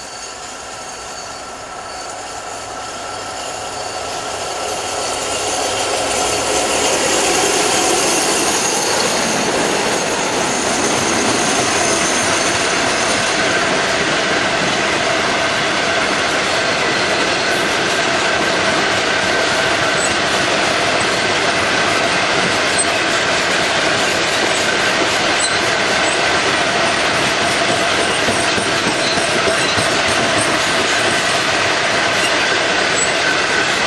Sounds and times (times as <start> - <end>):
Railroad car, train wagon: 0.0 - 33.8
Train: 0.0 - 33.8
Clickety-clack: 5.4 - 33.8.